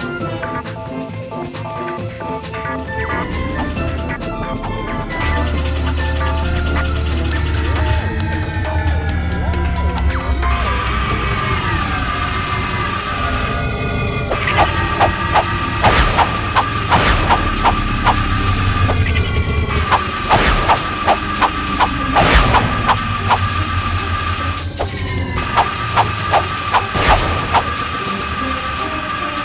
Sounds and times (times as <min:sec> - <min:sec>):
Music: 0:00.0 - 0:29.4.